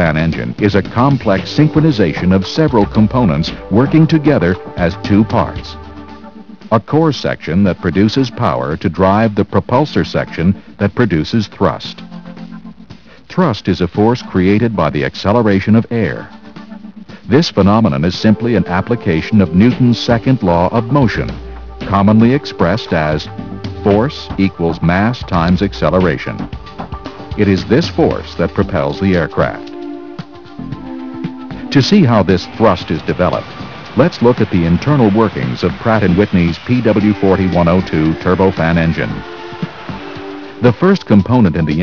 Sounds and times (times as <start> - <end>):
Speech: 0.0 - 5.8, 6.7 - 12.0, 13.3 - 16.3, 17.3 - 26.5, 27.4 - 29.7, 31.6 - 33.4, 34.0 - 39.2, 40.6 - 41.8
Music: 0.0 - 41.8.